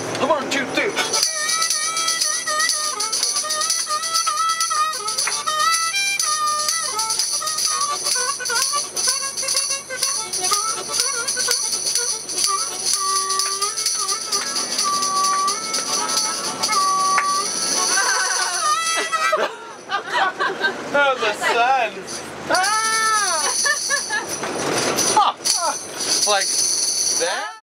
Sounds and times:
Music: 0:00.9 - 0:19.9, 0:22.6 - 0:27.6.

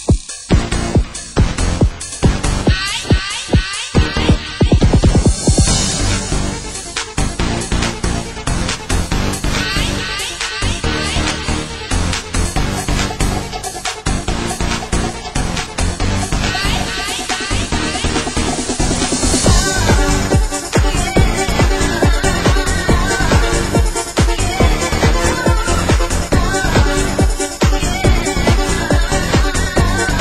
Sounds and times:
Music: 0:00.0 - 0:30.2.

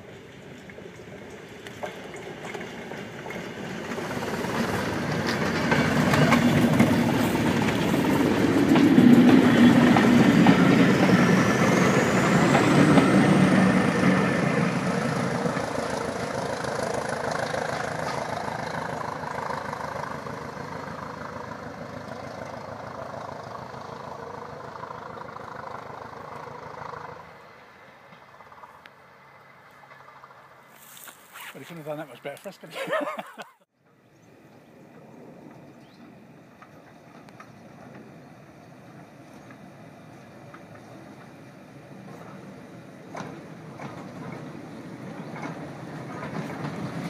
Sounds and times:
Railroad car, train wagon: 0:00.0 - 0:47.0
Train: 0:00.0 - 0:47.0.

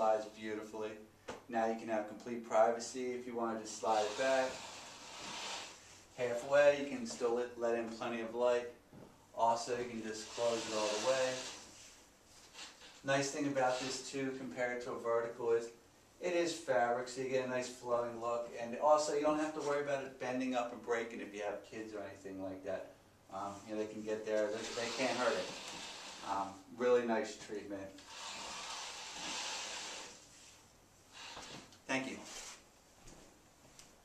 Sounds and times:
Speech: 0:00.0 - 0:04.6, 0:06.2 - 0:08.8, 0:09.4 - 0:11.6, 0:13.0 - 0:25.6, 0:26.2 - 0:28.0, 0:31.9 - 0:32.4.

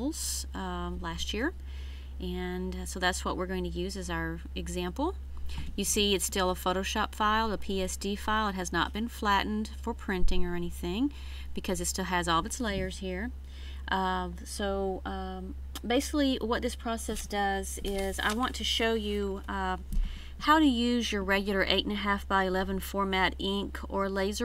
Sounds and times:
Speech: 0:00.0 - 0:01.6, 0:02.2 - 0:05.2, 0:05.8 - 0:13.3, 0:13.9 - 0:19.8, 0:20.4 - 0:24.4.

